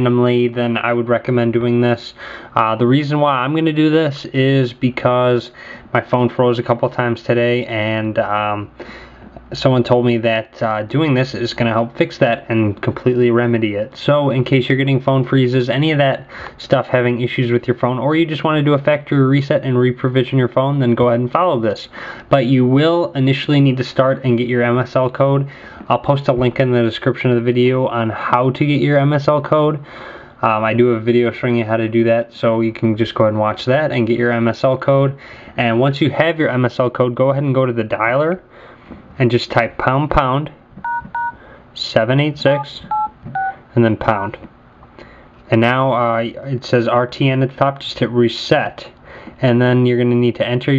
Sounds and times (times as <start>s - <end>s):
Speech: 0.0s - 8.8s, 9.5s - 38.5s, 39.2s - 40.6s, 41.8s - 43.0s, 43.7s - 44.5s, 45.5s - 50.7s
Inside, small room: 0.0s - 50.7s
Telephone dialing, DTMF: 40.8s - 41.4s, 42.9s - 43.6s.